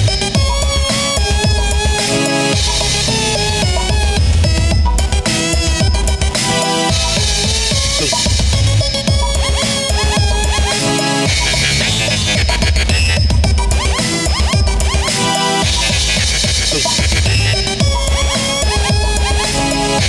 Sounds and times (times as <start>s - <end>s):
Synthesizer: 0.0s - 20.0s.